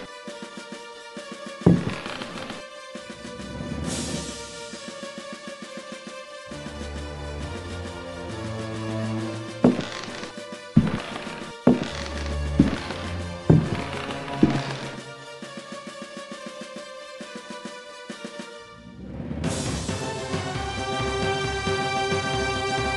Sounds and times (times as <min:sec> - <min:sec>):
Music: 0:00.0 - 0:22.9.